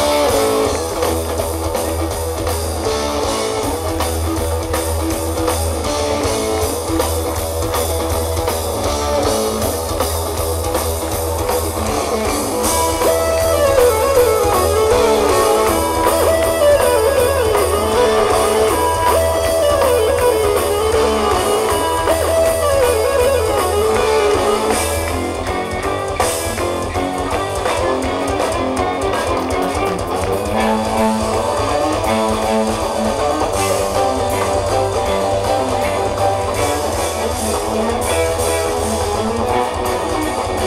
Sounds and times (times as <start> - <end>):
Progressive rock: 0.0 - 40.6.